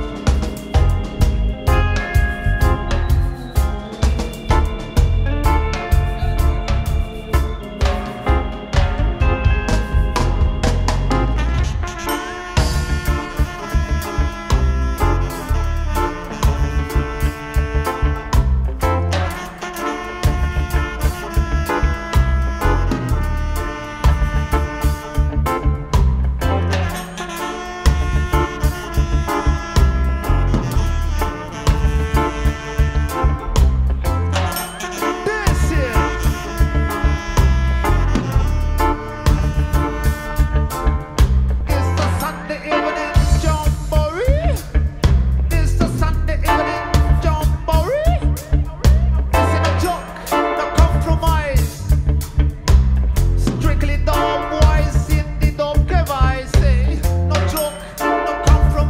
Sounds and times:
Reggae: 0.0 - 58.9.

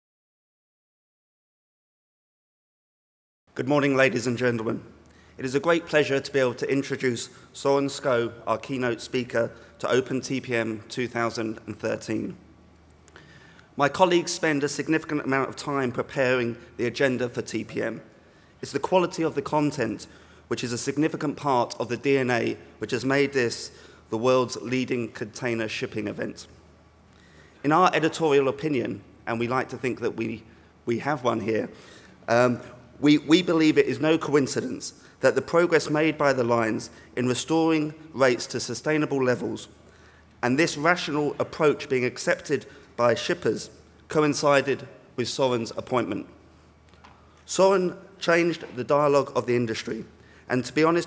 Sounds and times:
Narration, monologue: 3.5 - 51.0
Male speech, man speaking: 3.6 - 12.4, 13.8 - 26.5, 27.6 - 39.7, 40.4 - 46.4, 47.5 - 51.0.

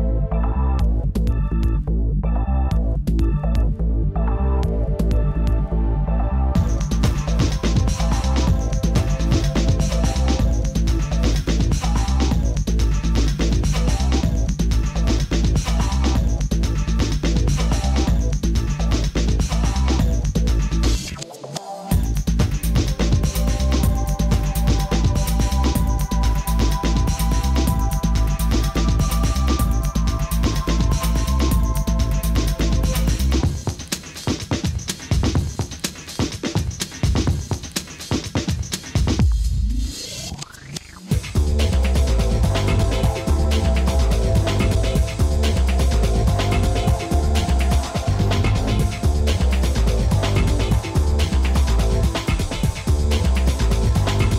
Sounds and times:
Music: 0.0 - 54.3.

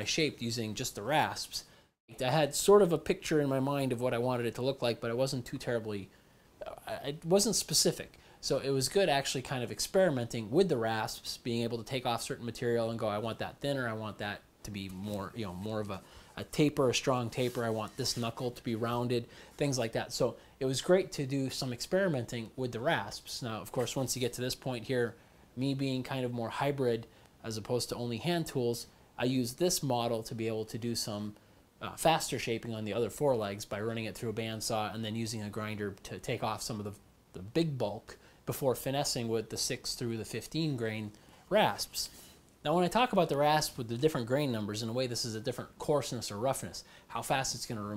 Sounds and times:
Speech: 0.0 - 47.9.

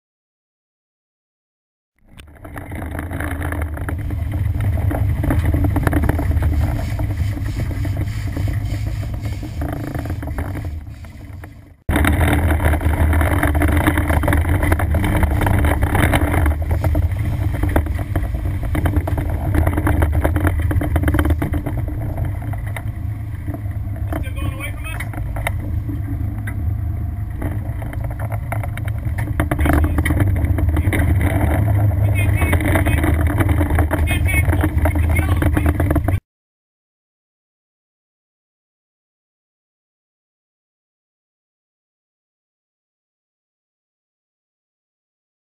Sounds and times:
Motorboat, speedboat: 2.0 - 36.2
Sailboat, sailing ship: 2.0 - 36.2
Speech: 24.2 - 25.1, 29.6 - 30.2, 32.0 - 33.0, 34.0 - 35.9.

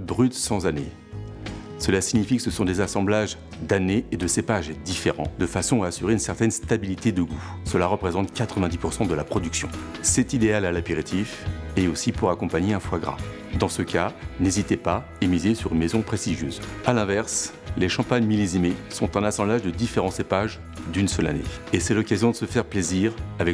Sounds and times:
Speech: 0.0 - 1.0, 1.8 - 23.5
Music: 0.0 - 23.5.

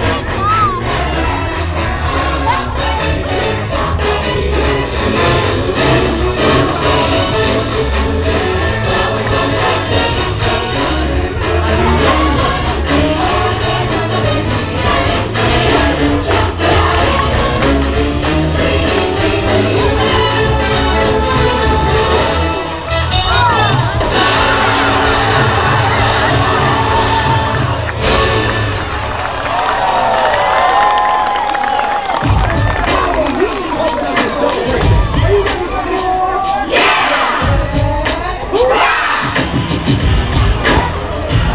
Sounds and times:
Music: 0.0 - 41.5
Speech: 32.9 - 38.8.

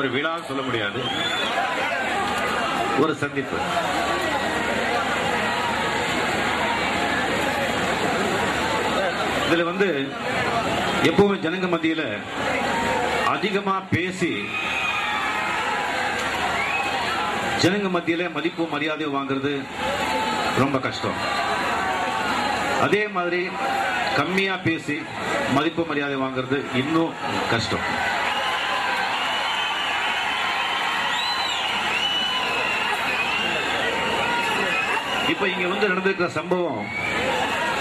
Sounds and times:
Male speech, man speaking: 0.0 - 1.1, 3.0 - 3.7, 9.0 - 12.3, 13.3 - 14.6, 17.6 - 19.7, 20.6 - 21.2, 22.8 - 23.6, 24.2 - 27.9, 35.3 - 36.9.

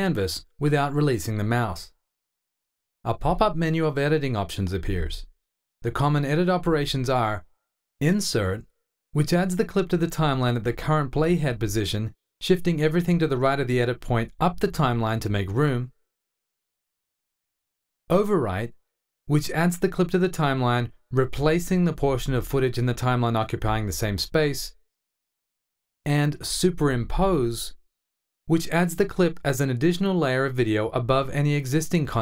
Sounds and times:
Speech: 0.0 - 2.0, 3.1 - 15.9, 18.1 - 24.8, 26.1 - 27.8, 28.5 - 32.2.

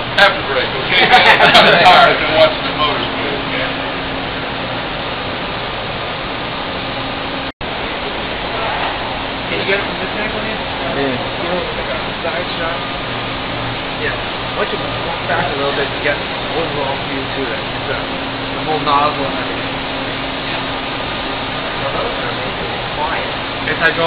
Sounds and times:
Heavy engine (low frequency): 0.0 - 24.0
Speech: 0.2 - 3.8, 14.0 - 19.6, 21.8 - 24.0.

